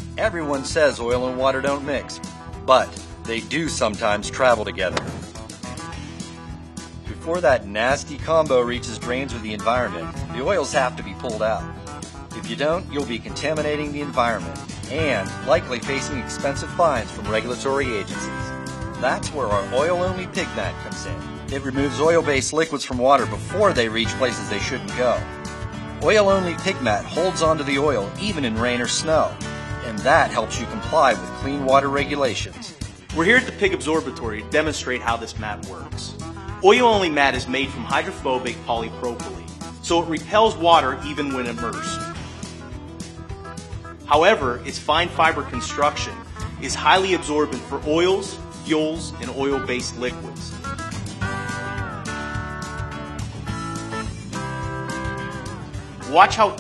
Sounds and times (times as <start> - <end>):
Music: 0.0 - 56.6
Speech: 0.2 - 5.0, 7.1 - 11.7, 12.4 - 25.3, 26.0 - 42.0, 44.1 - 50.5, 56.0 - 56.6.